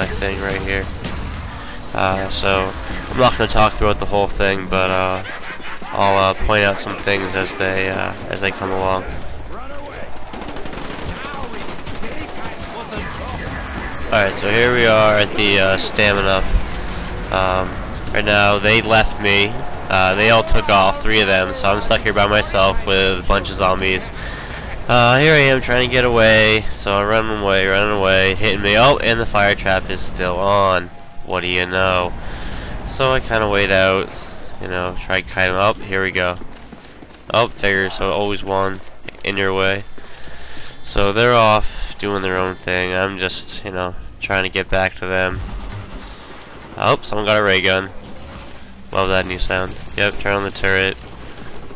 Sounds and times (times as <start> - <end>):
Speech: 0.0 - 0.9, 1.9 - 10.1, 11.2 - 13.5, 14.1 - 16.5, 17.3 - 24.1, 24.9 - 32.1, 32.9 - 36.4, 37.3 - 39.9, 40.8 - 45.4, 46.8 - 47.9, 49.0 - 51.0.